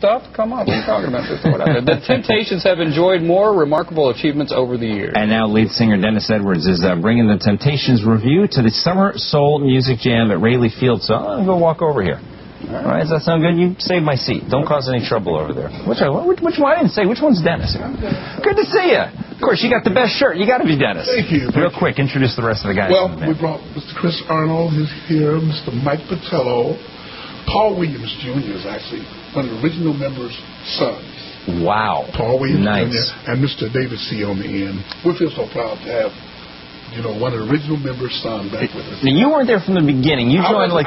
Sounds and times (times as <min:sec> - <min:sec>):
Speech: 0:00.0 - 0:26.8, 0:27.5 - 0:36.2, 0:36.9 - 0:40.8.